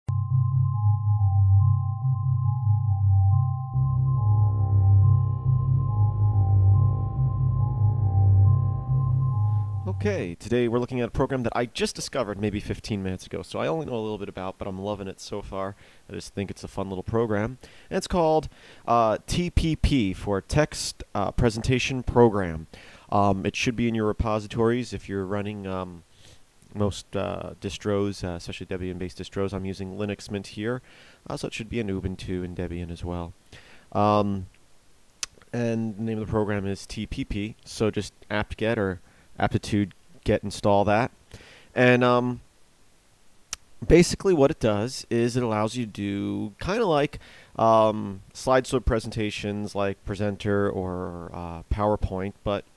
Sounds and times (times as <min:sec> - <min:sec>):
Music: 0:00.1 - 0:10.1.